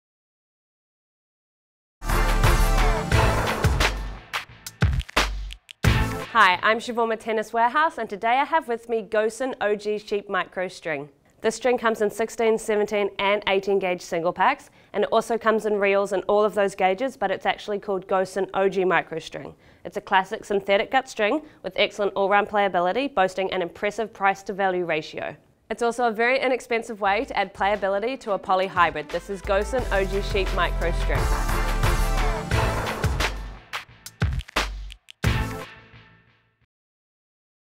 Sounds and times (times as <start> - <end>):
Music: 2.0 - 6.7, 27.1 - 36.7
Speech: 6.3 - 31.2.